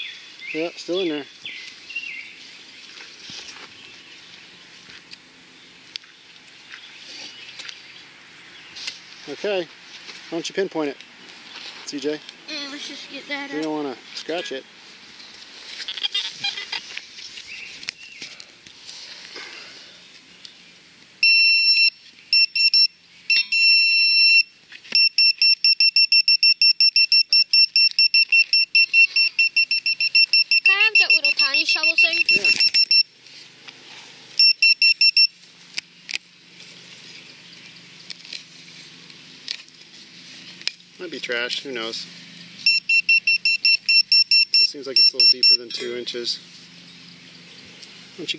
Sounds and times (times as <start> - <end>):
Beep, bleep: 21.2 - 33.1, 34.4 - 35.3, 42.7 - 45.6.